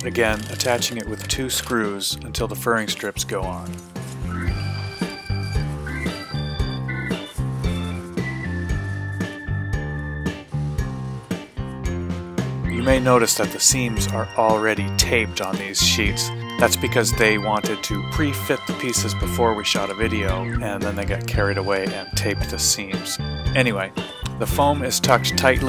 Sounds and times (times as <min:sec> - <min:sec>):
Speech: 0:00.0 - 0:03.8, 0:12.7 - 0:25.6
Music: 0:00.0 - 0:25.6.